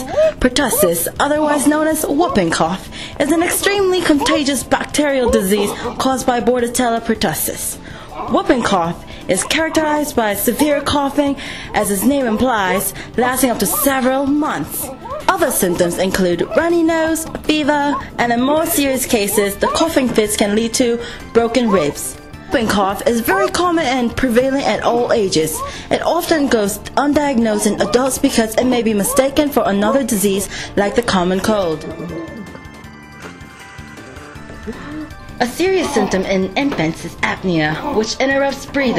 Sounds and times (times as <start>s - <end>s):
Speech: 0.0s - 32.2s, 35.4s - 38.9s
Music: 0.0s - 38.9s.